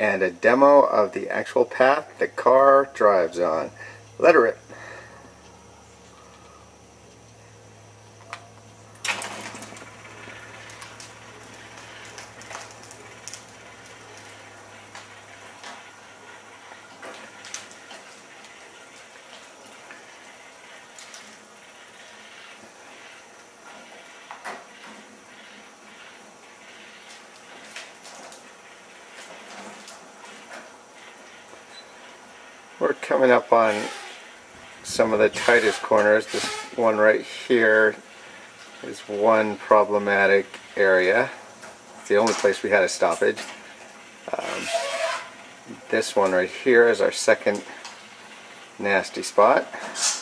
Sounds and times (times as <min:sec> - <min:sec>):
Speech: 0:00.0 - 0:04.6, 0:32.8 - 0:34.0, 0:34.8 - 0:38.0, 0:38.8 - 0:41.4, 0:42.1 - 0:43.5, 0:44.3 - 0:44.7, 0:45.7 - 0:47.8, 0:48.8 - 0:49.8.